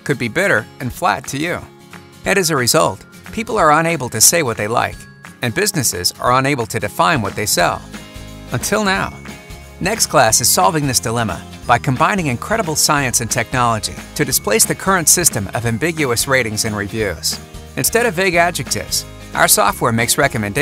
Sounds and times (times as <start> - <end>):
Speech: 0.0 - 1.7, 2.3 - 7.8, 8.6 - 9.2, 9.8 - 20.6
Music: 0.0 - 20.6.